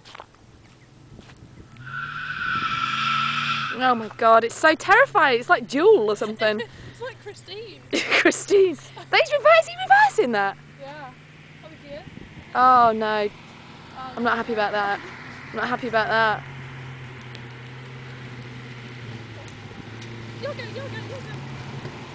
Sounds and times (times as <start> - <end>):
Car passing by: 1.6 - 22.1.